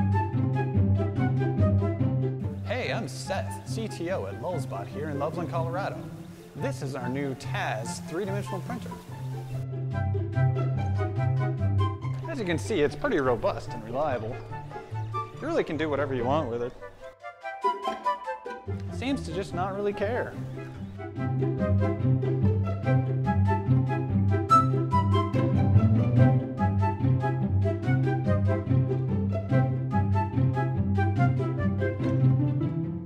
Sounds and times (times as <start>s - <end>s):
Music: 0.0s - 33.0s.